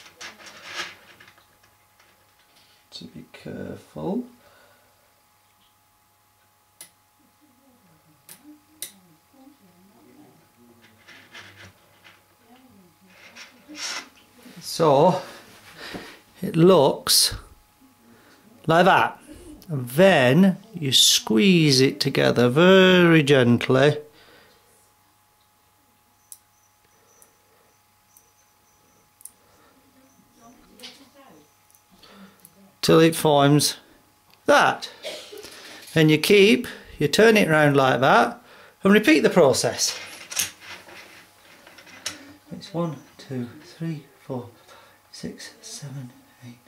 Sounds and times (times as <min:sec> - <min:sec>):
Inside, small room: 0:00.0 - 0:46.6.